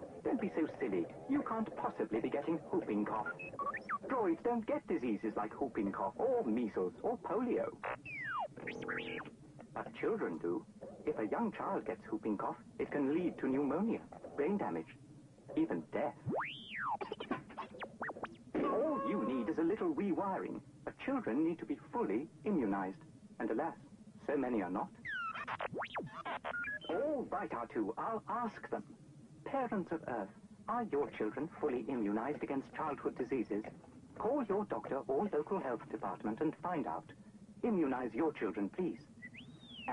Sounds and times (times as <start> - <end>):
Speech: 0.2 - 3.4, 4.0 - 7.8, 9.7 - 16.3, 18.6 - 24.9, 26.9 - 39.1.